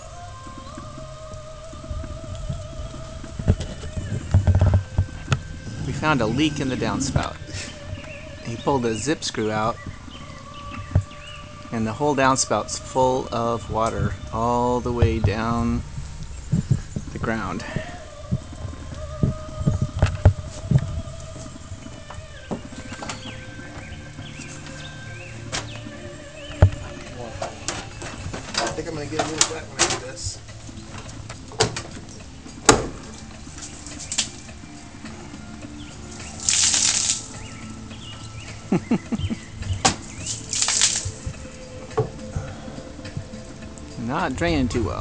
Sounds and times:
Music: 0.0 - 45.0.

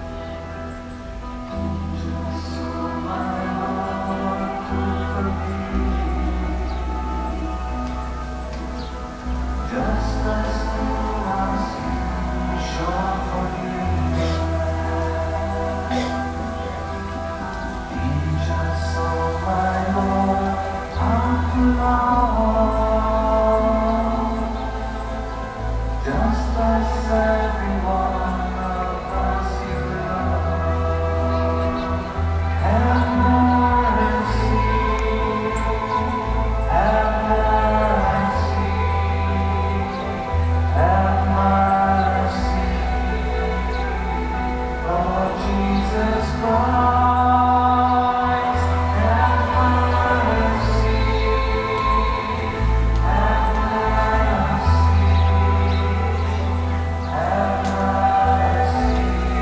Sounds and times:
Christmas music: 0.0 - 59.4
Independent music: 0.0 - 59.4.

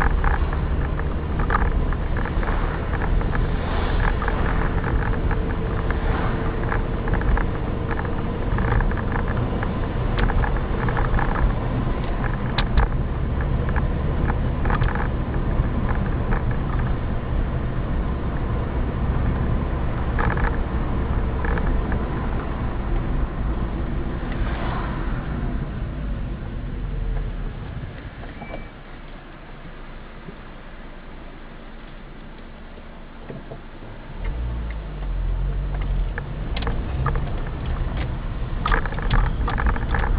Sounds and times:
Car: 0.0 - 40.1.

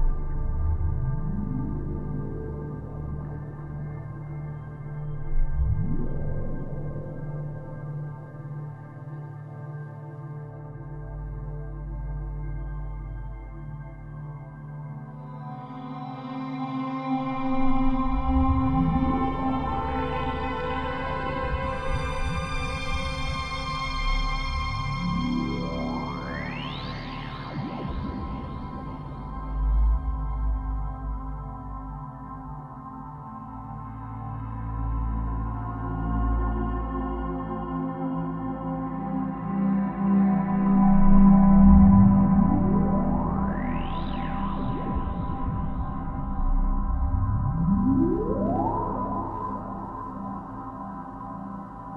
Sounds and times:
Ambient music: 0.0 - 51.9
Electronica: 40.4 - 51.9.

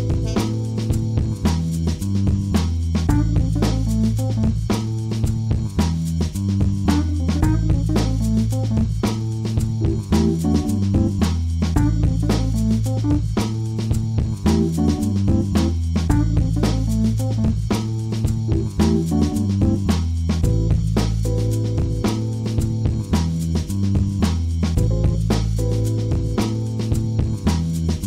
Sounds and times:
Jazz: 0.0 - 28.0.

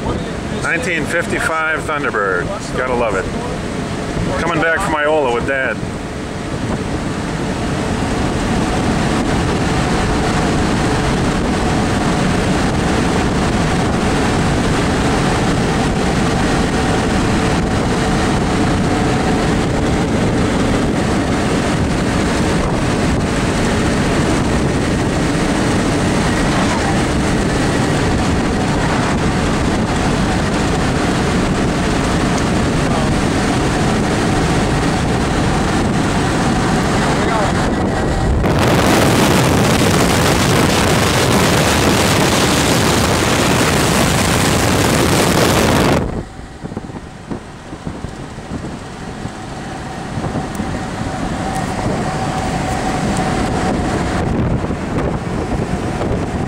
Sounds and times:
Vehicle: 0.0 - 56.4.

